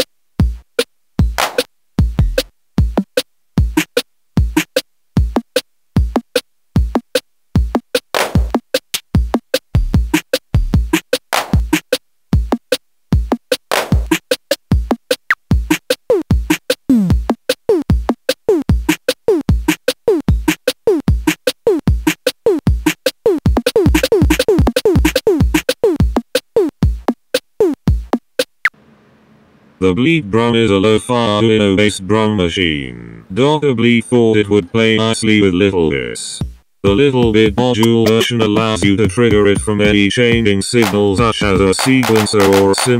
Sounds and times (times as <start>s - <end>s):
Music: 0.0s - 28.8s, 36.4s - 42.9s.